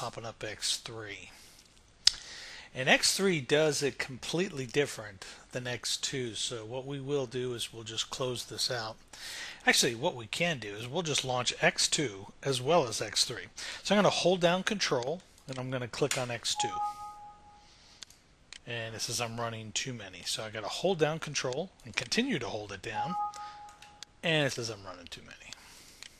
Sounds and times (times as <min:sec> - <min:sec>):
Speech: 0:00.0 - 0:01.4, 0:02.8 - 0:09.0, 0:09.6 - 0:16.9, 0:18.6 - 0:23.2, 0:24.2 - 0:25.6.